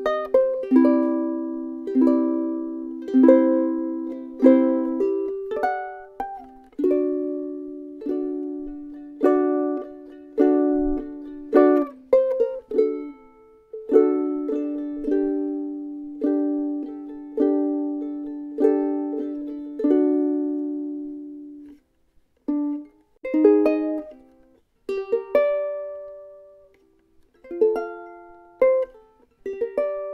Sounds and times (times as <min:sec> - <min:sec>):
Guitar: 0:00.0 - 0:21.8
Ukulele: 0:00.0 - 0:30.1.